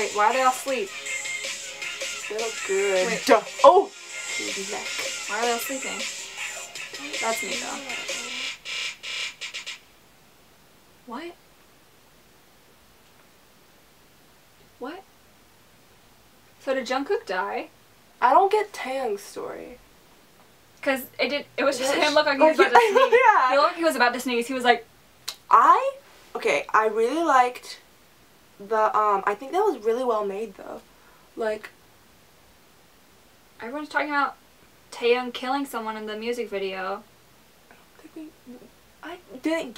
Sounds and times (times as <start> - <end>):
Music: 0.0 - 9.8
Inside, small room: 0.0 - 39.7
Speech: 2.3 - 6.0, 20.8 - 24.8, 25.5 - 27.8, 28.6 - 30.8, 31.4 - 31.8, 33.6 - 37.0, 38.0 - 39.7.